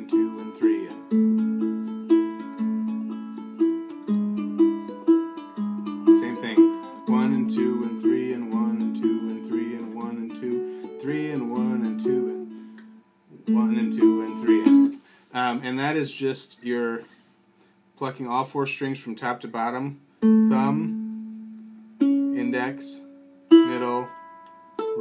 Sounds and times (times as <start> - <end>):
Speech: 0.0 - 1.0, 6.2 - 12.4, 15.3 - 17.1, 18.0 - 21.0, 22.4 - 24.1
Ukulele: 0.0 - 15.0, 20.2 - 25.0
Guitar: 0.0 - 15.1, 20.2 - 25.0.